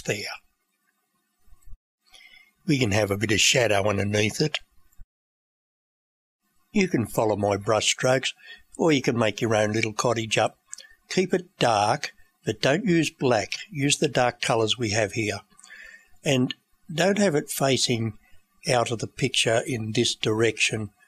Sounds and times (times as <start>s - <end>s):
Narration, monologue: 0.0s - 5.1s, 6.4s - 21.0s.